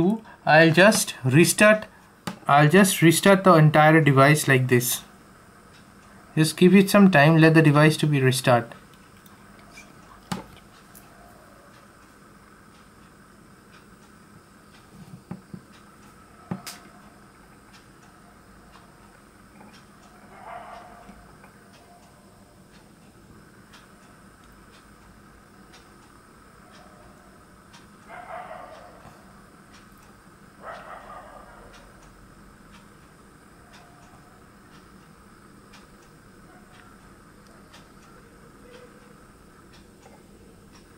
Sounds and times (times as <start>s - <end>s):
Speech: 0.0s - 1.9s, 2.5s - 5.1s, 6.4s - 8.8s
Inside, small room: 0.0s - 40.9s.